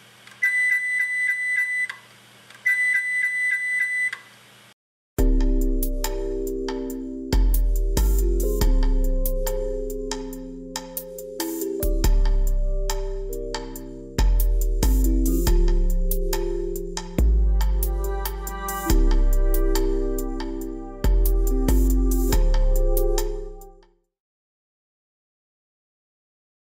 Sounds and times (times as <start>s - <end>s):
Music: 5.2s - 24.1s.